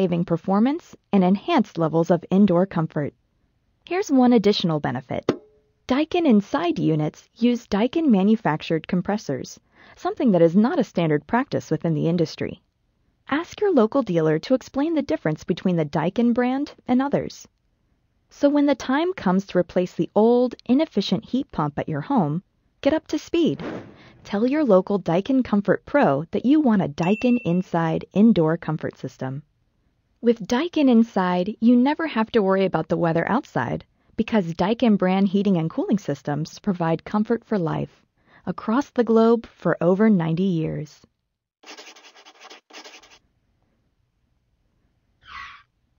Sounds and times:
Speech: 0.0s - 3.2s, 3.9s - 5.3s, 5.9s - 12.6s, 13.3s - 17.5s, 18.3s - 29.4s, 30.2s - 41.1s.

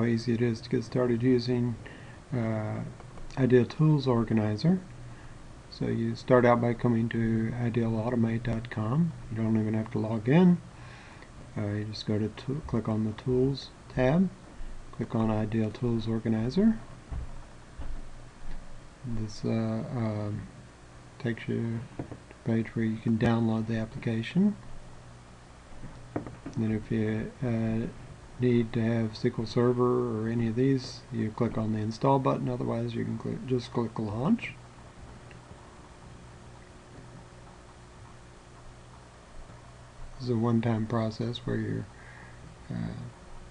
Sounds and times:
Speech: 0.0s - 4.9s, 5.7s - 10.7s, 11.6s - 14.4s, 15.0s - 16.9s, 19.0s - 20.5s, 21.2s - 24.6s, 26.6s - 34.6s, 40.2s - 41.9s, 42.7s - 43.2s.

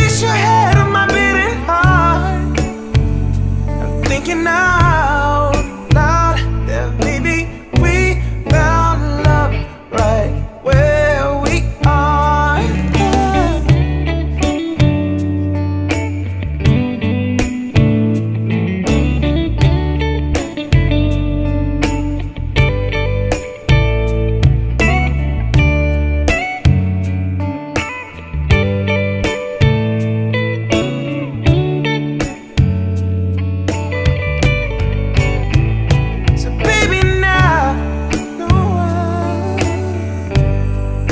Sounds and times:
Singing: 0.0s - 2.8s, 4.0s - 13.8s, 36.4s - 41.1s
Guitar: 0.0s - 41.1s
Soul music: 0.0s - 41.1s.

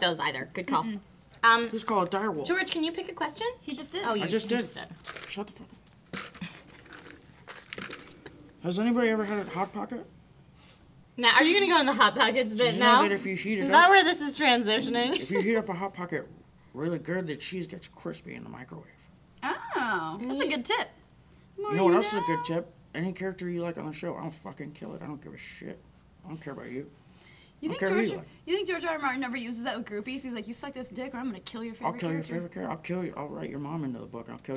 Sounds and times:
Inside, small room: 0.0s - 34.5s.

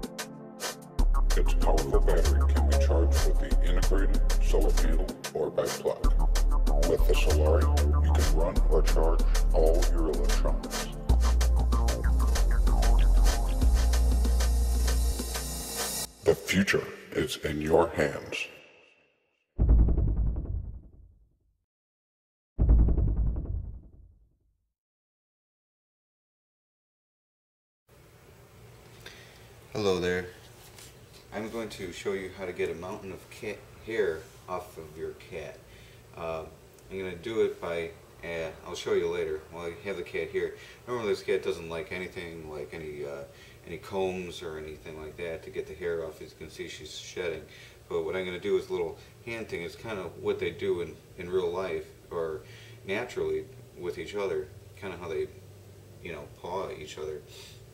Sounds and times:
Speech: 1.4s - 6.1s, 6.8s - 11.0s, 16.3s - 18.6s, 29.7s - 30.4s, 31.3s - 35.6s, 36.2s - 55.4s, 56.0s - 57.6s.

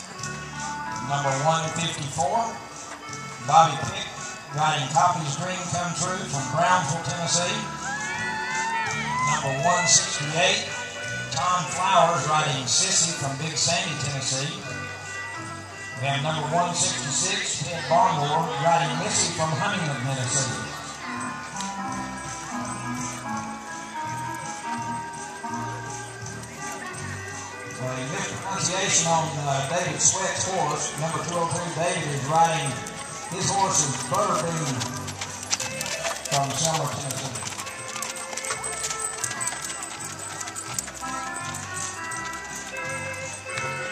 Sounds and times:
Clip-clop: 0.0s - 43.9s
Music: 0.0s - 43.9s
Speech: 1.1s - 2.6s, 11.4s - 14.7s, 16.0s - 20.8s, 27.8s - 35.0s, 36.3s - 37.4s.

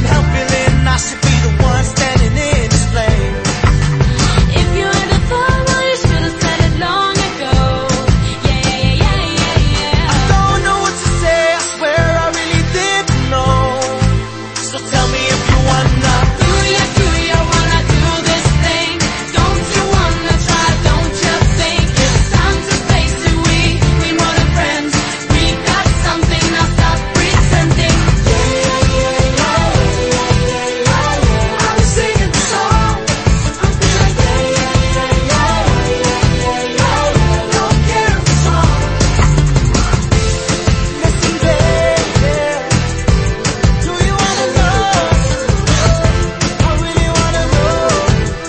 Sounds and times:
Exciting music: 0.0s - 48.4s.

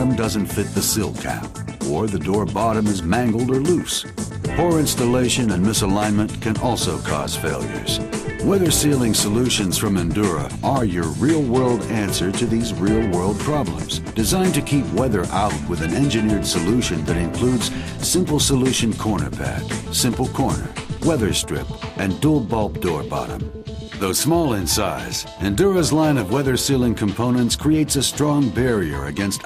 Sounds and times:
Speech: 0.0s - 23.4s, 24.0s - 29.4s
Music: 0.0s - 29.4s.

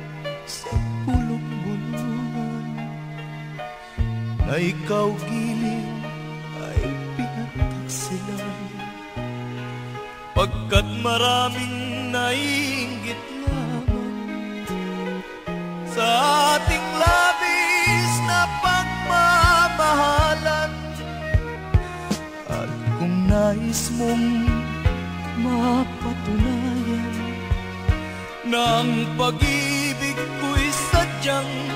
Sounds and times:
Music: 0.0s - 31.7s.

